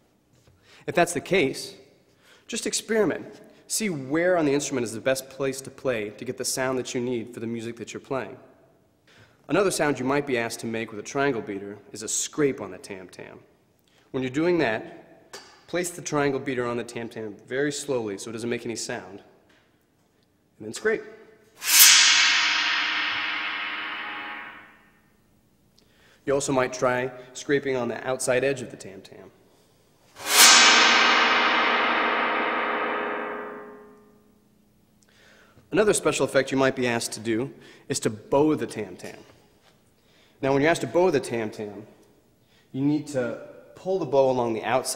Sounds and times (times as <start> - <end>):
Speech: 0.8 - 1.9, 2.5 - 8.5, 9.5 - 13.5, 14.1 - 19.4, 20.6 - 21.2, 26.2 - 29.4, 35.7 - 39.4, 40.4 - 42.0, 42.7 - 44.9.